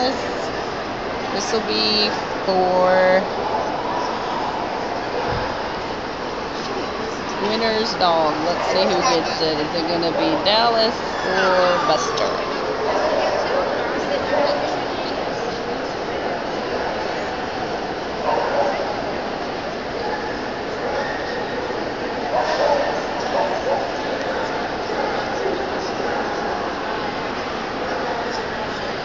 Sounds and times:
Speech: 0.0s - 0.5s, 1.3s - 3.3s, 7.3s - 15.8s.

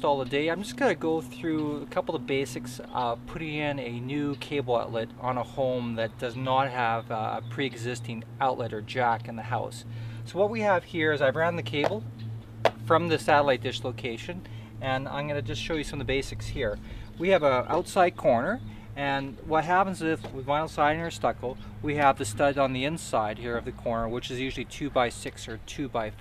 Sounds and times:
Speech: 0.0s - 12.0s, 12.8s - 26.2s.

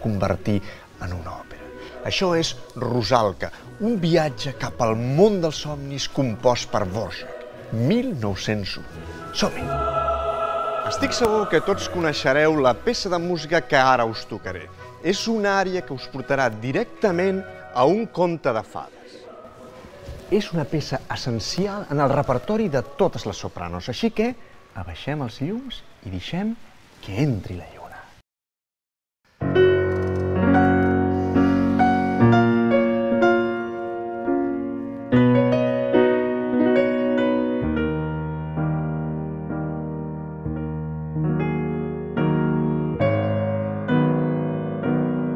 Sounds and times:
Speech: 0.0s - 9.9s, 10.8s - 19.3s, 20.2s - 28.2s.

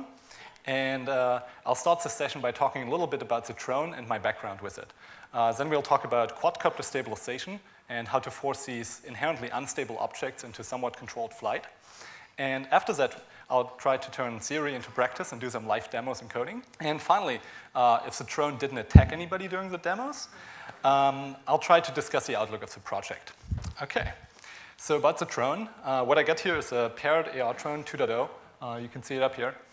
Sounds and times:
Speech: 0.7s - 11.8s, 12.4s - 24.2s, 24.8s - 29.7s.

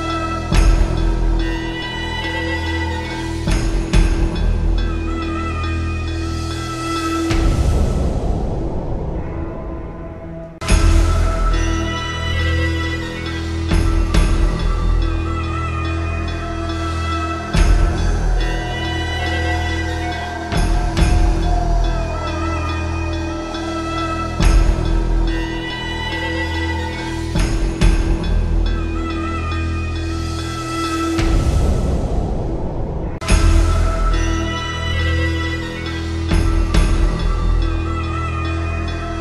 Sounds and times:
Music: 0.0s - 39.2s.

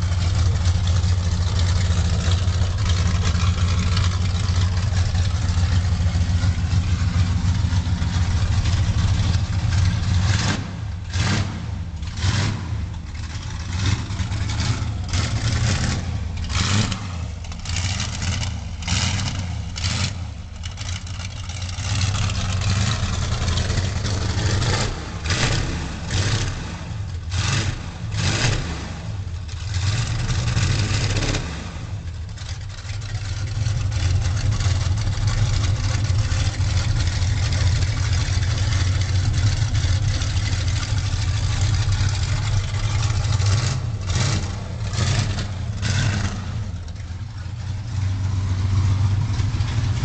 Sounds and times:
Vehicle: 0.0s - 50.0s.

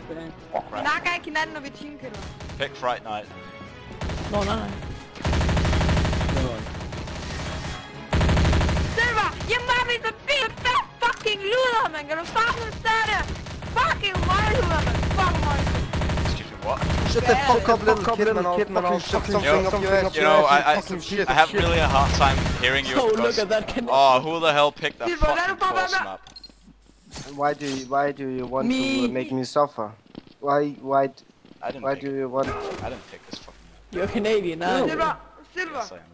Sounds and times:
Music: 0.0s - 25.5s
Fusillade: 2.2s - 2.7s, 4.0s - 4.6s, 5.2s - 9.9s, 12.5s - 17.5s, 21.6s - 23.0s.

